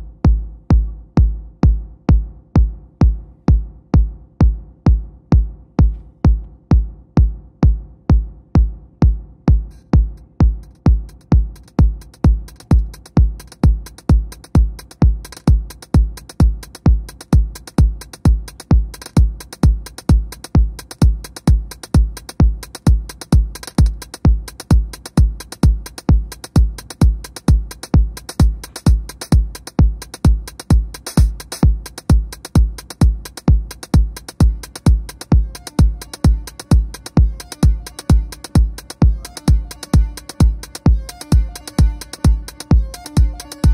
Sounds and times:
Techno: 0.0s - 43.7s.

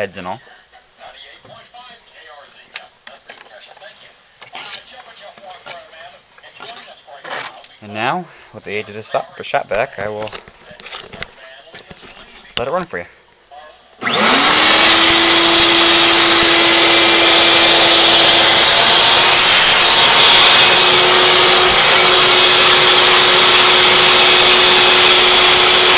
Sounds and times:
Speech: 0.0s - 13.9s.

